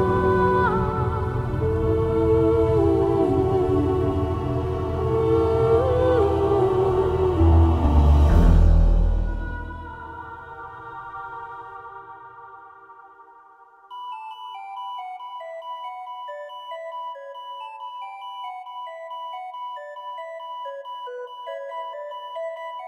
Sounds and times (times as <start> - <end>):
Music: 0.0 - 22.8.